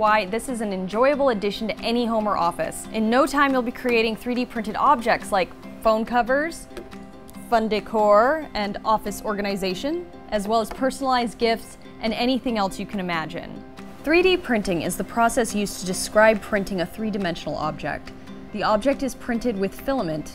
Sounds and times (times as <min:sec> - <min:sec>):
Speech: 0:00.0 - 0:06.6, 0:07.5 - 0:18.0, 0:18.6 - 0:20.3
Music: 0:00.0 - 0:20.3.